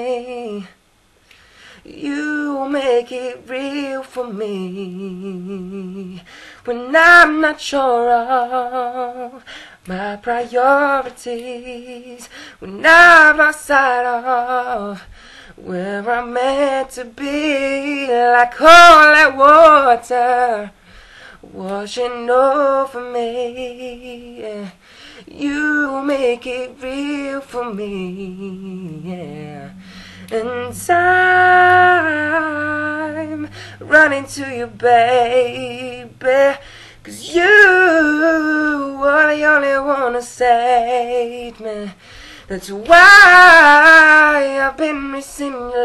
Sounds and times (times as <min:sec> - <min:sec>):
Male singing: 0:00.0 - 0:00.8, 0:01.8 - 0:20.8, 0:21.4 - 0:45.8.